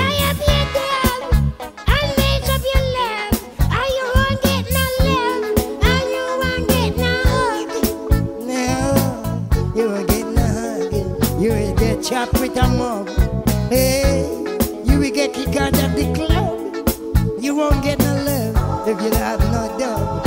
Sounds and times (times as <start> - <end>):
Reggae: 0.0 - 20.2.